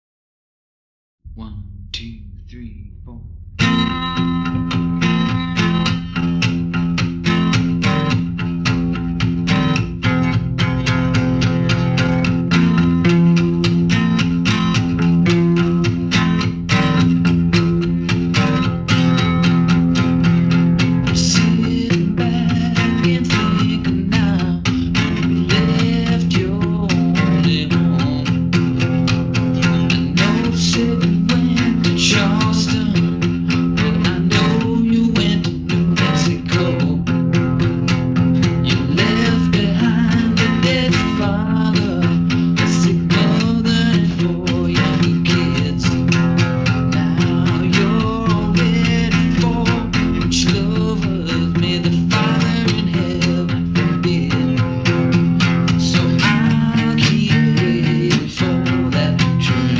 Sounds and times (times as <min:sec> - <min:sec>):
Music: 0:01.3 - 0:59.7.